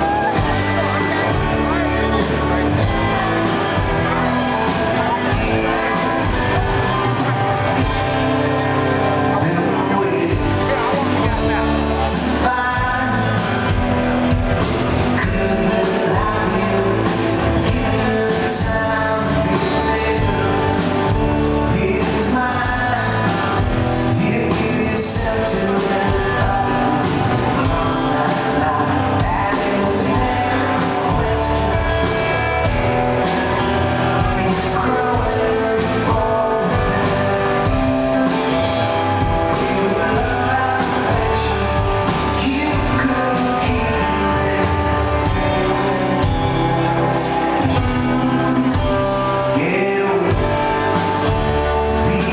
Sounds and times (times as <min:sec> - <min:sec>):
Music: 0:00.0 - 0:52.3.